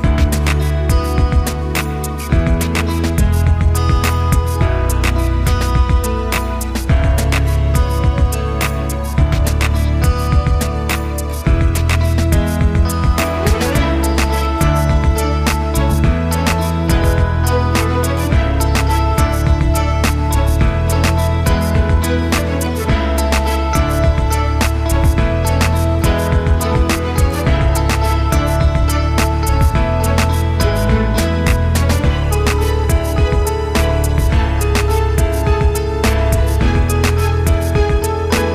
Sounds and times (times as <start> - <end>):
Music: 0.0 - 38.5.